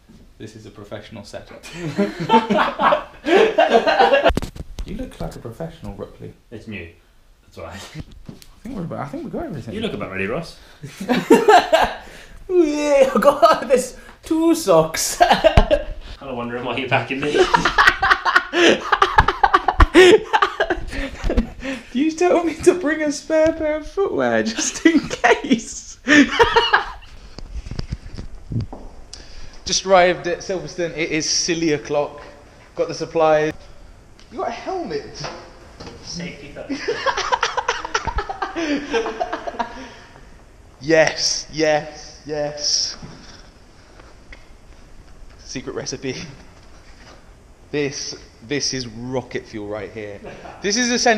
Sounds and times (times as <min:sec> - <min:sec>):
Inside, small room: 0:00.0 - 0:51.1
Speech: 0:12.5 - 0:15.3, 0:16.2 - 0:17.5, 0:47.7 - 0:51.1.